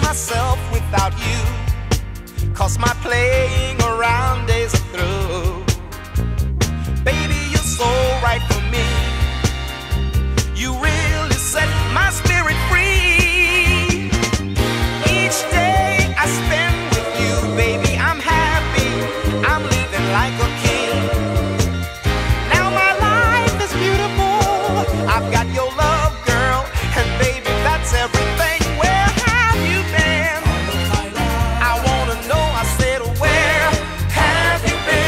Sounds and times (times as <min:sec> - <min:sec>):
Funk: 0:00.0 - 0:35.0.